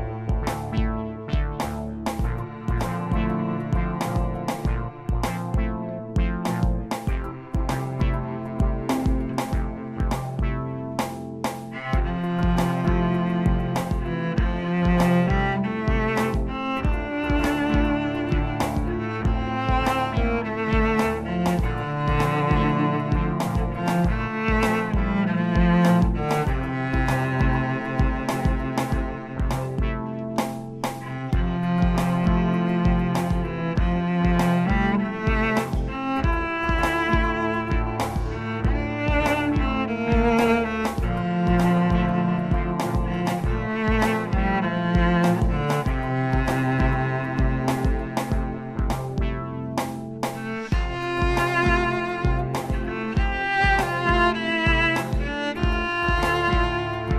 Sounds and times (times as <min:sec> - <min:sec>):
Cello: 0:00.0 - 0:57.1.